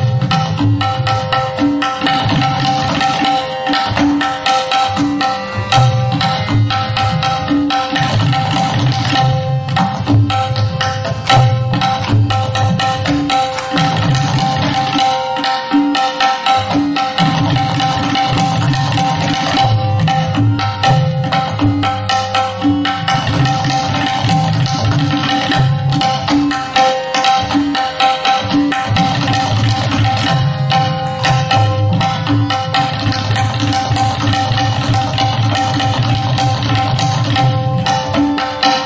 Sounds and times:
Tabla: 0:00.0 - 0:38.8.

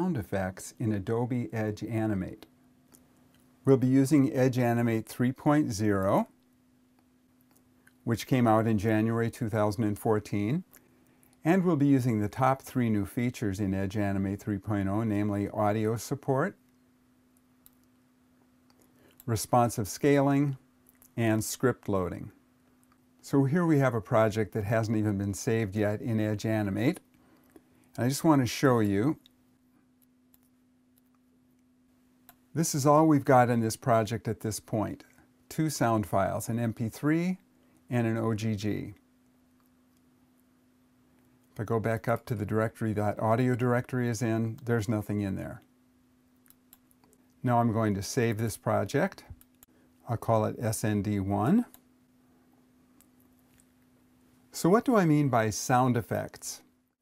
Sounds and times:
Speech: 0:00.0 - 0:02.5, 0:03.6 - 0:06.4, 0:08.0 - 0:10.7, 0:11.4 - 0:16.6, 0:19.3 - 0:20.6, 0:21.2 - 0:22.4, 0:23.2 - 0:27.1, 0:28.0 - 0:29.3, 0:32.6 - 0:39.0, 0:41.6 - 0:45.7, 0:47.4 - 0:49.4, 0:50.0 - 0:51.8, 0:54.5 - 0:56.7.

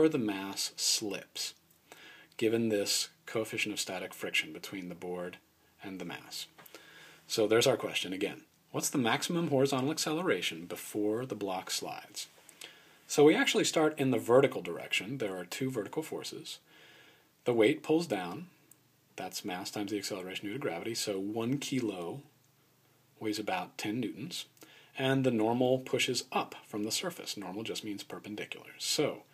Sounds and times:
Speech: 0:00.0 - 0:01.6, 0:02.4 - 0:06.6, 0:07.3 - 0:12.3, 0:13.1 - 0:16.6, 0:17.4 - 0:18.6, 0:19.2 - 0:22.3, 0:23.2 - 0:29.3.

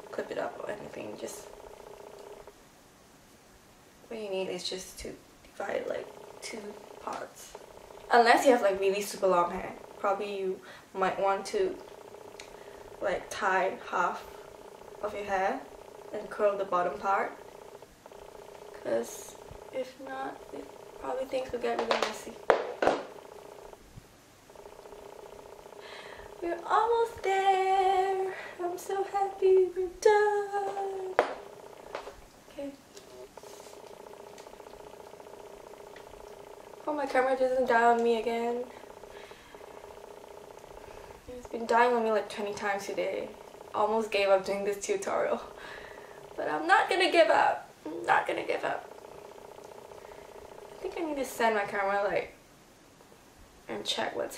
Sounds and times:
Inside, small room: 0:00.0 - 0:54.3
Speech: 0:00.1 - 0:01.5, 0:04.1 - 0:07.5, 0:08.1 - 0:11.8, 0:13.0 - 0:14.2, 0:15.0 - 0:17.4, 0:18.8 - 0:22.4, 0:26.4 - 0:31.2, 0:32.5 - 0:32.8, 0:36.9 - 0:38.7, 0:41.3 - 0:45.5, 0:46.4 - 0:48.8, 0:50.8 - 0:52.4, 0:53.7 - 0:54.3.

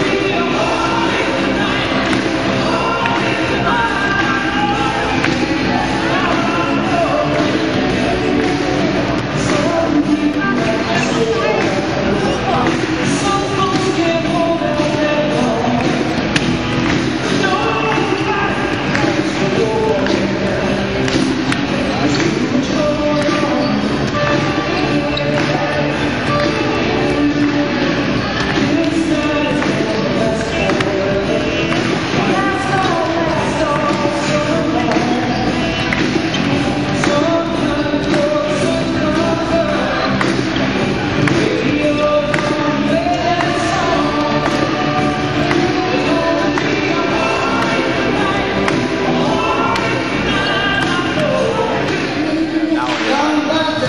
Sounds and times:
Speech: 0:00.0 - 0:16.3, 0:17.2 - 0:53.8
Music: 0:00.0 - 0:53.8.

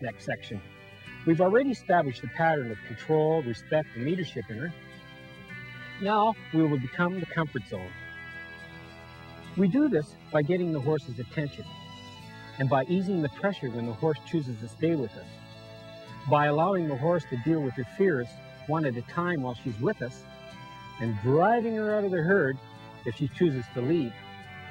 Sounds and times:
Speech: 0:00.0 - 0:00.6, 0:01.3 - 0:04.7, 0:06.0 - 0:07.9, 0:09.6 - 0:11.7, 0:12.6 - 0:15.3, 0:16.2 - 0:20.2, 0:21.0 - 0:24.2
Music: 0:00.0 - 0:24.7.

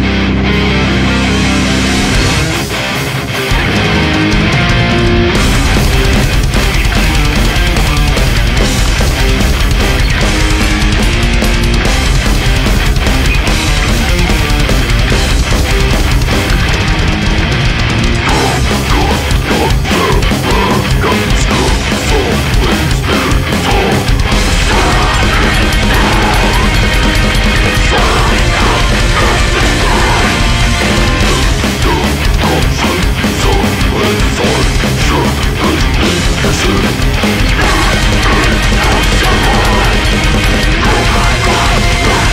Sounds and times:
Rhythm and blues: 0:00.0 - 0:42.3.

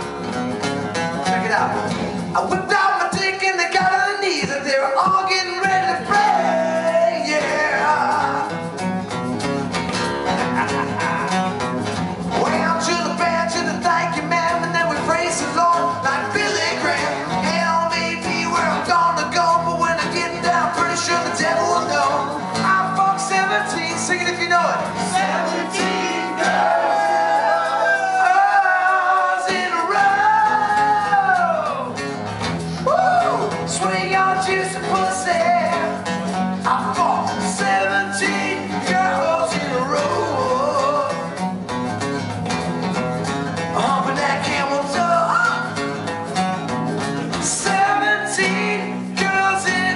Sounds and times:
Music: 0:00.0 - 0:49.9.

